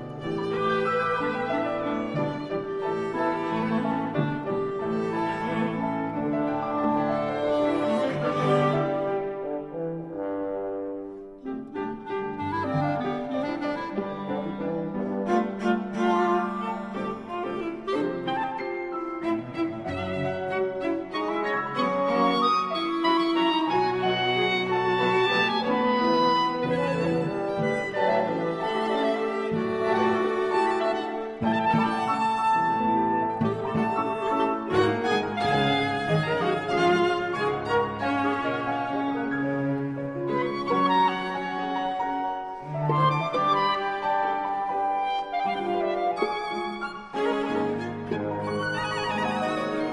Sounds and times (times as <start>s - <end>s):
Violin, fiddle: 0.0s - 10.4s, 11.1s - 49.9s
Cello: 0.0s - 49.9s.